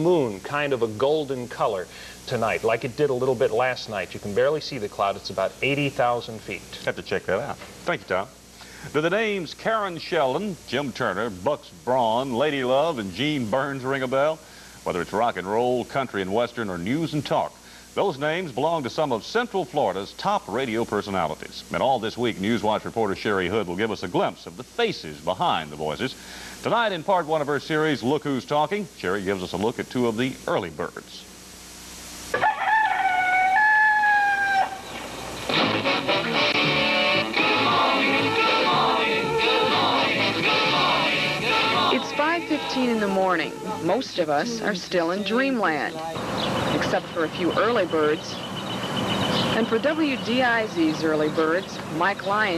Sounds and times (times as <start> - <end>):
Speech: 0.0 - 31.3, 42.0 - 46.2, 46.8 - 48.4, 49.6 - 52.5.